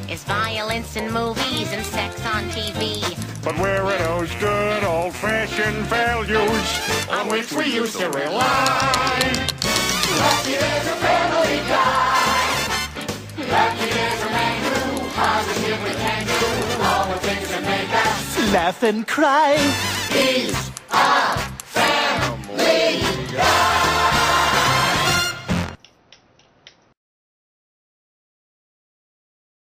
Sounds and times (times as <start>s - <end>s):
Music: 0.0s - 18.8s, 19.5s - 25.9s.